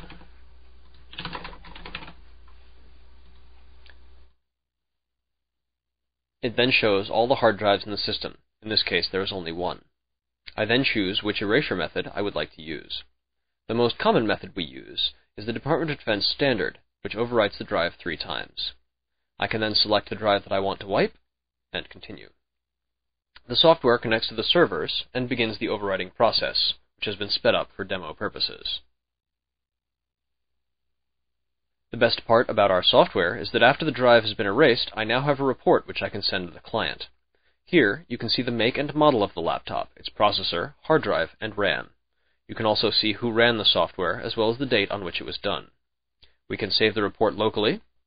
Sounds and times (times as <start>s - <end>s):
Speech: 6.4s - 9.9s, 10.5s - 13.1s, 13.7s - 18.8s, 19.4s - 22.4s, 23.4s - 28.9s, 31.9s - 45.8s, 46.5s - 48.0s.